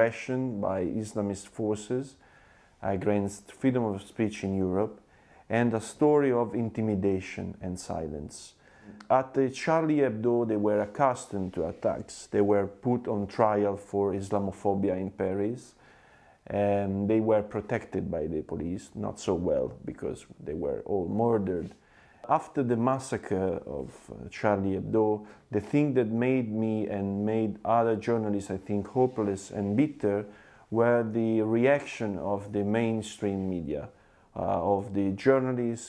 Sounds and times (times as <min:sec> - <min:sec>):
Male speech, man speaking: 0:00.0 - 0:02.2, 0:02.8 - 0:15.8, 0:16.5 - 0:35.8
Narration, monologue: 0:00.0 - 0:35.8.